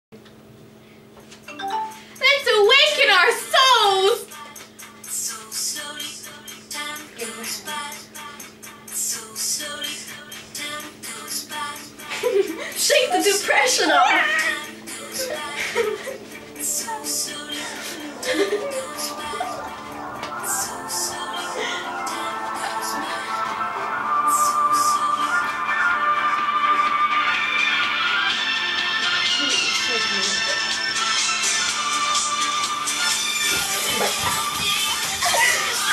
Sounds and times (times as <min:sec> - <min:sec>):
Music: 0:01.3 - 0:35.9
Speech: 0:02.2 - 0:04.3, 0:12.8 - 0:14.4, 0:29.4 - 0:30.6.